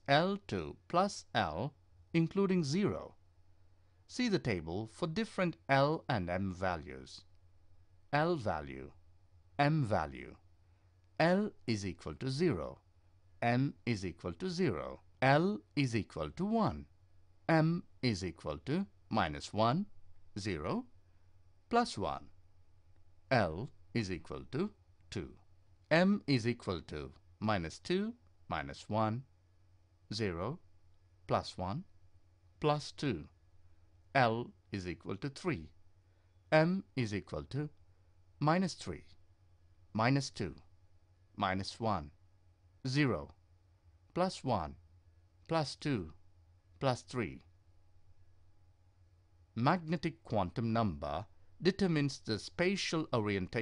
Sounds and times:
Narration, monologue: 0.0 - 53.6.

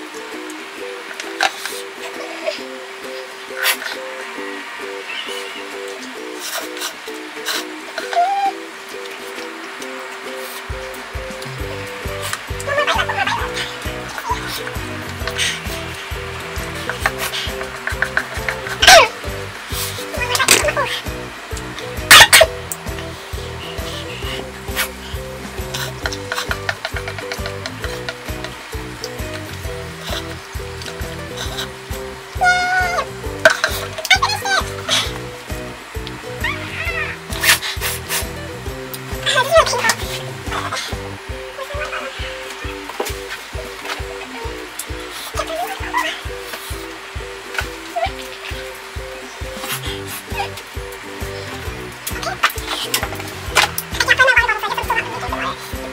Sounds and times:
Sizzle: 0.0 - 55.9.

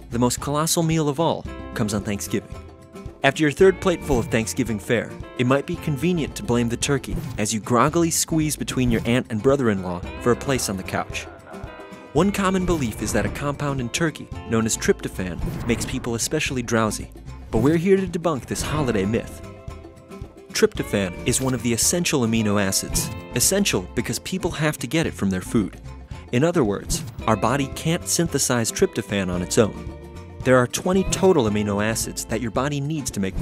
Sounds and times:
Speech: 0.0 - 2.5, 3.2 - 19.4, 20.5 - 29.8, 30.4 - 33.4
Music: 0.0 - 33.4.

